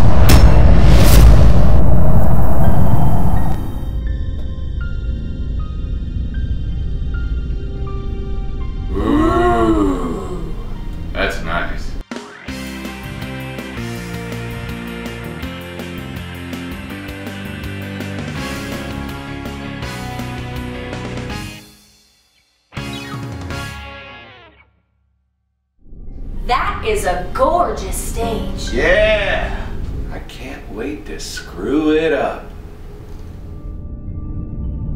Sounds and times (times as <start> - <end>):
Speech: 26.5 - 32.5.